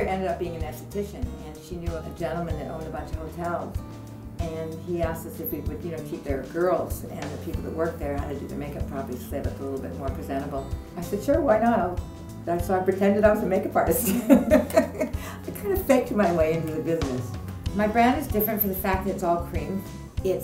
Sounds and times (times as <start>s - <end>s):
Speech: 0.0s - 3.8s, 4.4s - 14.7s, 15.5s - 20.4s
Music: 0.0s - 20.4s.